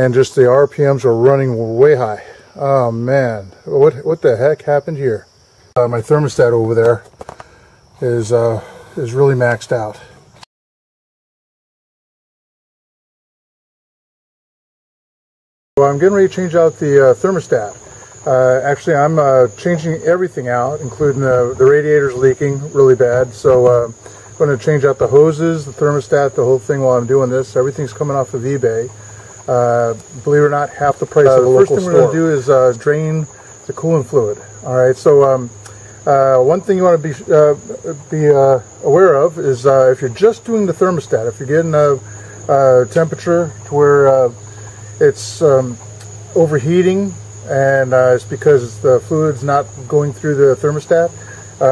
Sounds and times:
Cricket: 0.0 - 10.5, 15.8 - 51.7.

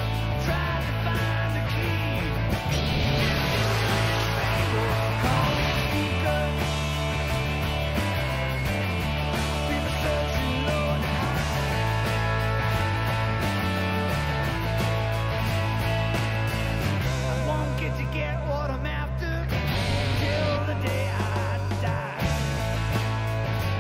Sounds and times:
Strum: 0.0 - 17.0, 19.5 - 23.0
Electric guitar: 0.0 - 23.8.

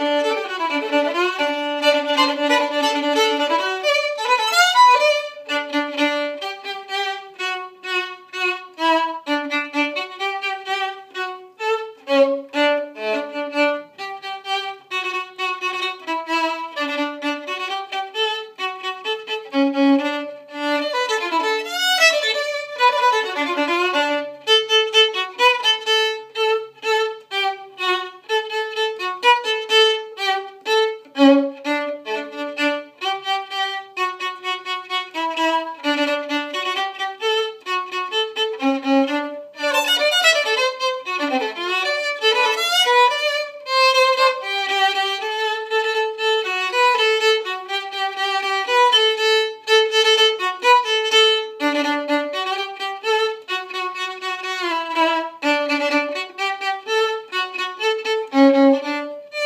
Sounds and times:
Violin, fiddle: 0.0 - 59.4.

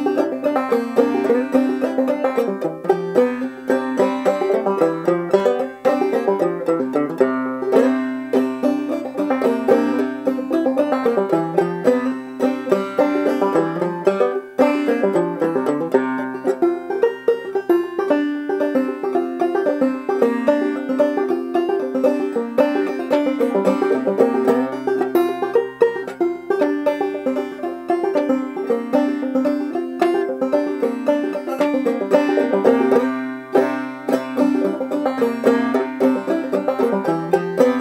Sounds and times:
Music: 0.0 - 37.8.

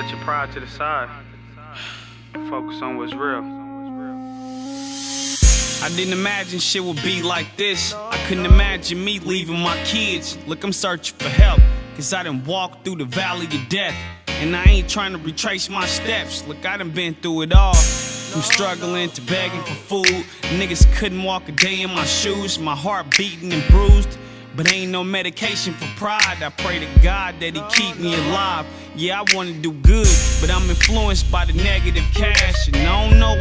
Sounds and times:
Music: 0.0 - 33.4.

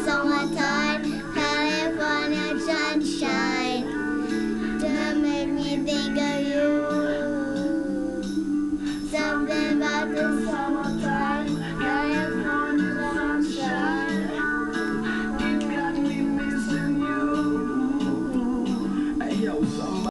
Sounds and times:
Music: 0.0 - 20.1.

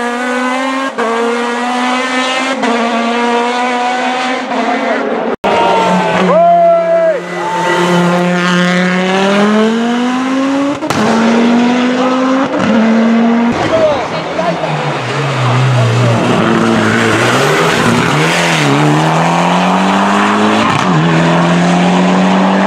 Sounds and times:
Race car, auto racing: 0.0 - 22.6
Speech: 13.6 - 16.3.

